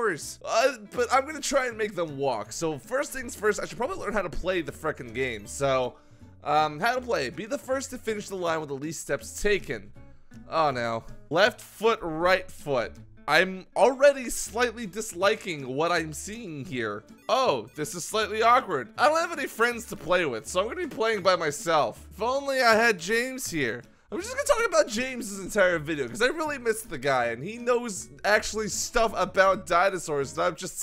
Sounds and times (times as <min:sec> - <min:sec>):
Speech: 0:00.0 - 0:09.9, 0:10.5 - 0:30.8
Music: 0:00.0 - 0:30.8.